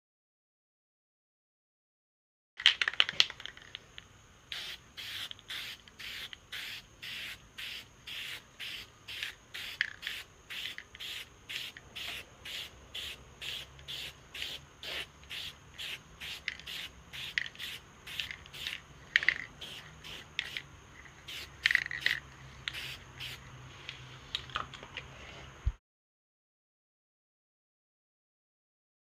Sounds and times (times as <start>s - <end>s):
Spray: 4.5s - 24.0s.